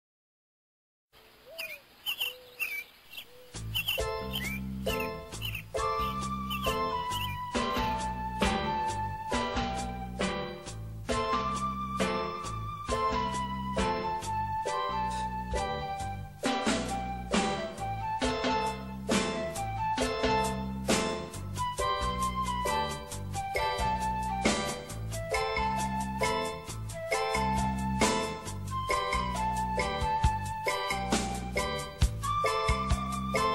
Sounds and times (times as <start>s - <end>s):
Bird: 1.2s - 8.0s.